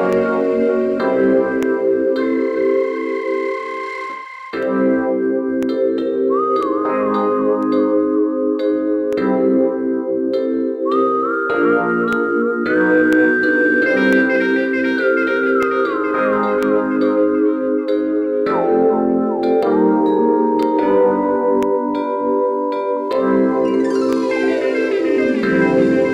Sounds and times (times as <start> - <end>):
Soundtrack music: 0.0 - 10.0, 10.9 - 26.1
New-age music: 0.0 - 26.1.